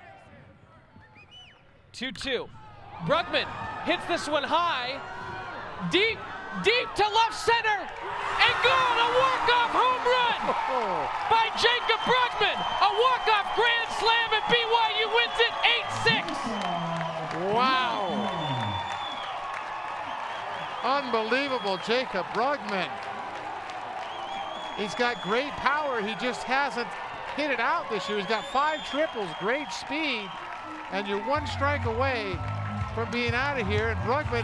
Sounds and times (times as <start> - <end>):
Speech: 24.8 - 30.3.